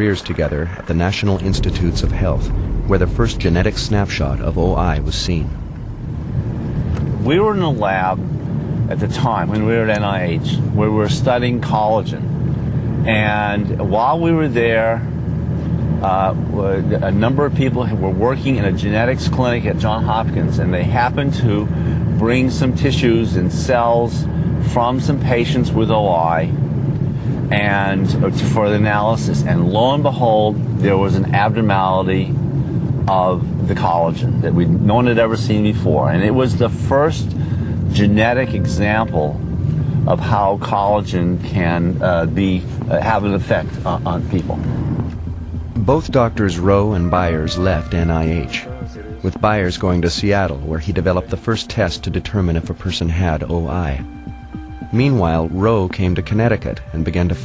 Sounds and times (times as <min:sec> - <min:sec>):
Speech: 0:00.0 - 0:05.6, 0:07.2 - 0:08.3, 0:08.9 - 0:12.2, 0:13.0 - 0:15.1, 0:16.0 - 0:26.6, 0:27.5 - 0:32.4, 0:33.1 - 0:39.4, 0:40.1 - 0:44.6, 0:45.8 - 0:54.1, 0:54.9 - 0:57.4.